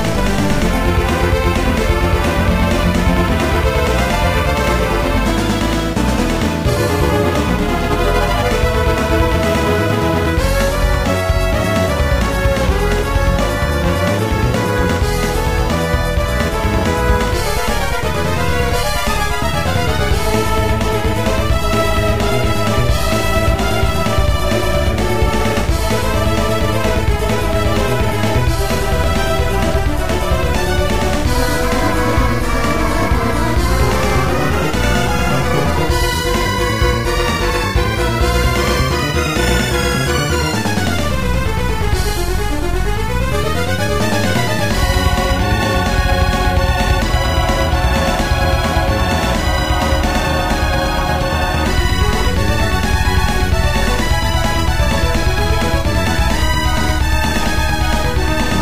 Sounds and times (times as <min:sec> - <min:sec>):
Exciting music: 0:00.0 - 0:58.6.